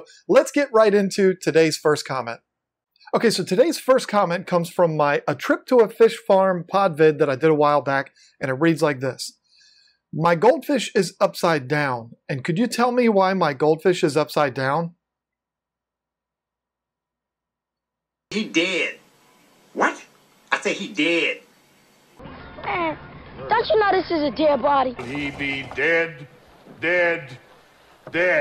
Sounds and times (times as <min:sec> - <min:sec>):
Speech: 0:00.0 - 0:02.4, 0:03.1 - 0:09.4, 0:10.2 - 0:15.0, 0:18.3 - 0:19.0, 0:20.5 - 0:21.4, 0:28.2 - 0:28.4.